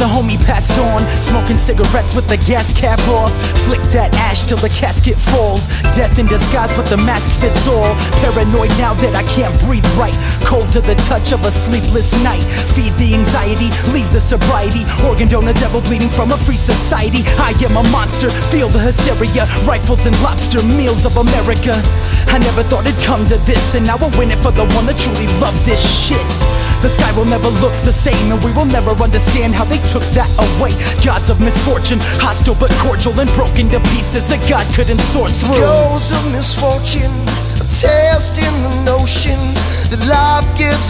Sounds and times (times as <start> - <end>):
Rhythm and blues: 0.0 - 40.8.